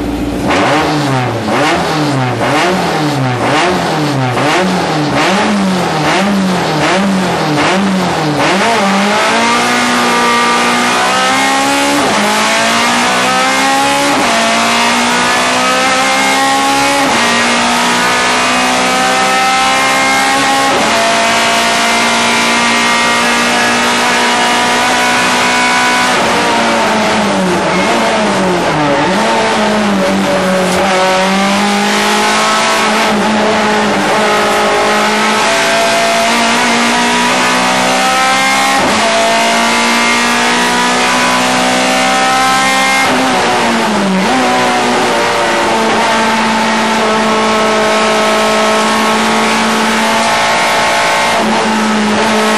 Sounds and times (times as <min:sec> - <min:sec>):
Car: 0:00.0 - 0:52.5.